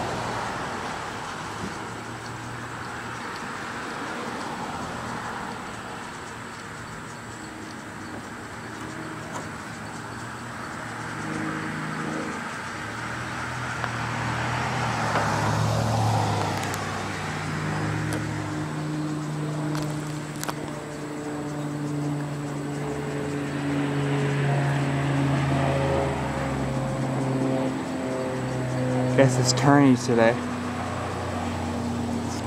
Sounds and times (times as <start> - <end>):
Outside, urban or manmade: 0.0 - 32.4.